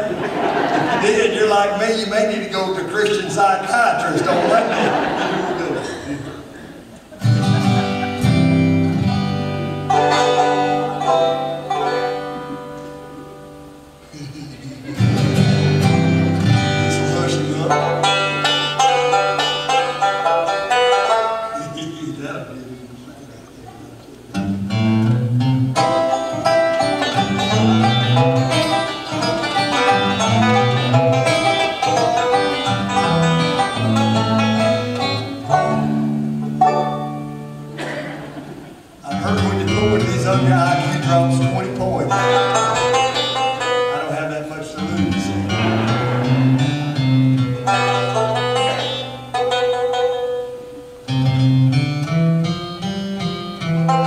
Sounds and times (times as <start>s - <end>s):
Banjo: 0.0s - 22.1s, 24.3s - 54.0s.